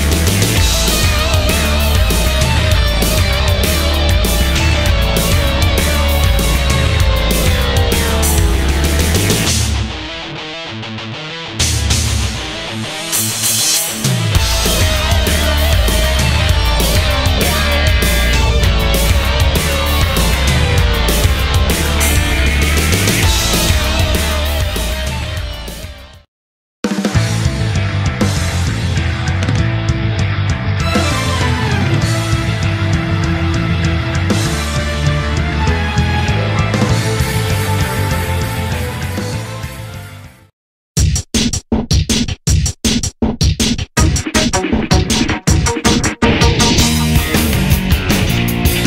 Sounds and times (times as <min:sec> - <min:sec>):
Drum and bass: 0:00.0 - 0:26.2, 0:26.9 - 0:40.0, 0:41.0 - 0:48.8.